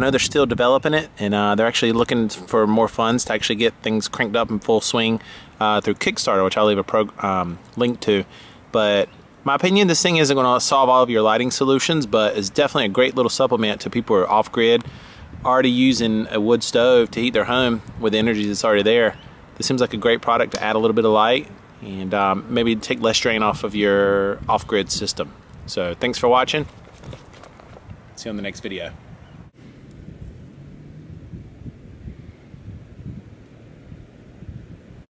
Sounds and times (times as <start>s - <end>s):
Speech: 0.0s - 14.8s, 15.4s - 26.7s, 28.2s - 29.0s.